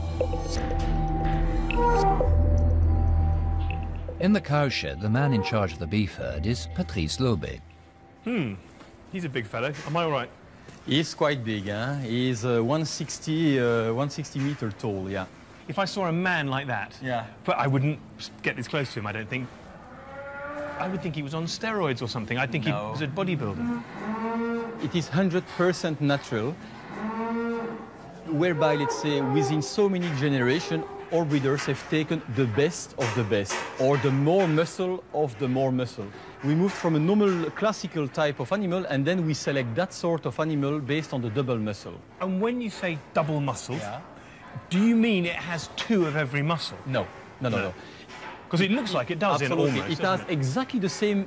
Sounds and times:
Moo: 1.6s - 2.5s, 5.0s - 5.8s, 19.8s - 21.1s, 23.4s - 24.9s, 26.6s - 31.2s.

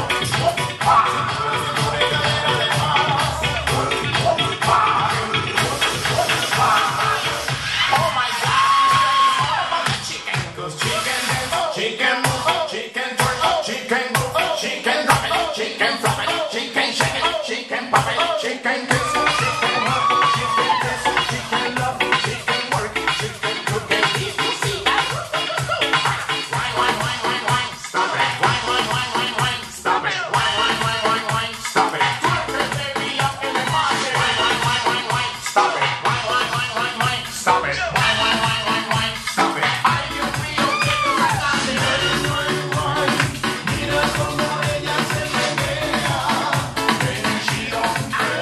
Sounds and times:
Music: 0.0s - 48.4s.

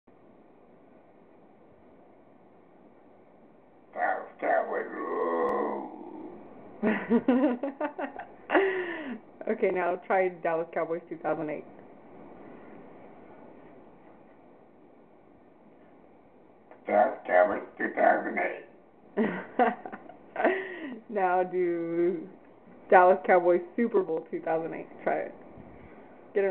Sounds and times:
Speech: 4.0s - 5.8s, 9.4s - 11.7s, 16.9s - 18.7s, 21.1s - 25.4s.

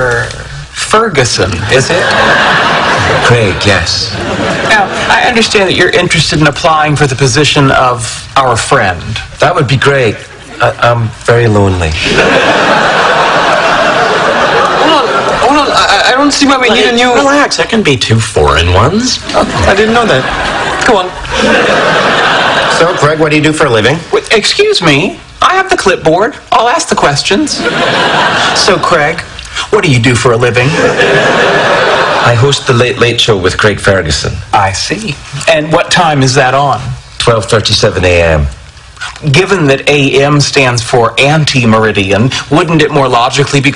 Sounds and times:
Speech: 3.1s - 12.1s, 14.8s - 21.2s, 32.2s - 38.6s, 39.2s - 43.7s.

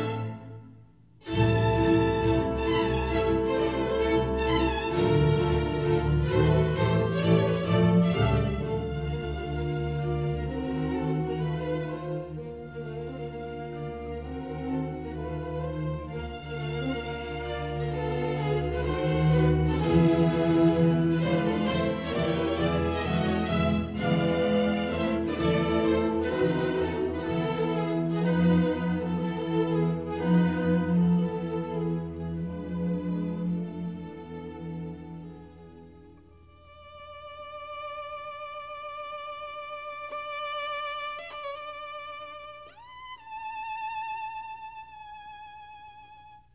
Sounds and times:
Violin, fiddle: 1.2s - 46.5s.

